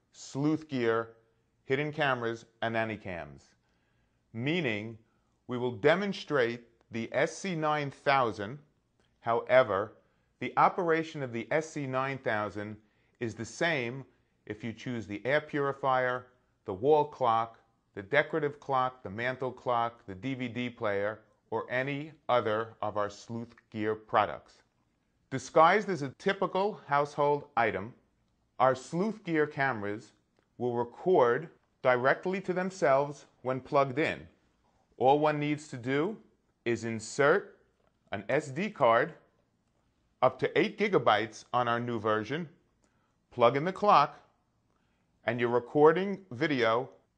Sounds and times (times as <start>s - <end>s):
Speech: 0.0s - 3.6s, 4.3s - 24.7s, 25.3s - 28.0s, 28.6s - 39.3s, 40.2s - 42.6s, 43.3s - 44.3s, 45.2s - 47.1s.